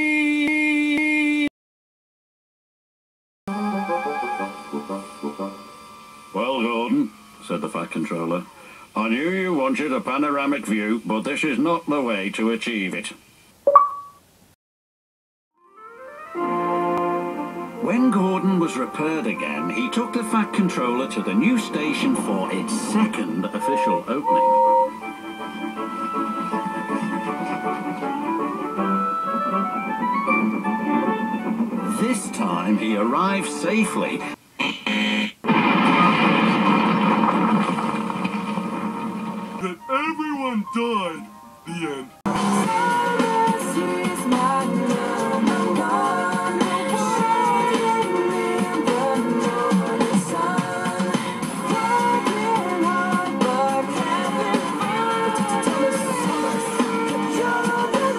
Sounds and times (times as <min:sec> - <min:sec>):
Music: 0:03.5 - 0:07.5, 0:15.6 - 0:34.4, 0:38.2 - 0:58.1
Speech: 0:06.4 - 0:13.2, 0:17.8 - 0:24.4, 0:31.9 - 0:34.4, 0:39.6 - 0:42.2.